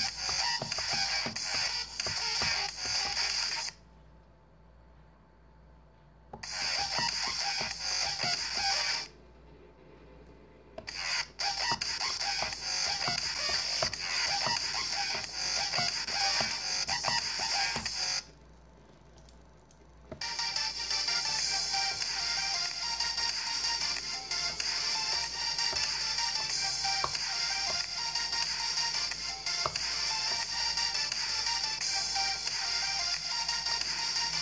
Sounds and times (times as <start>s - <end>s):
Music: 0.0s - 3.9s, 6.3s - 9.2s, 10.8s - 18.3s, 20.1s - 34.4s
Inside, small room: 0.0s - 34.4s.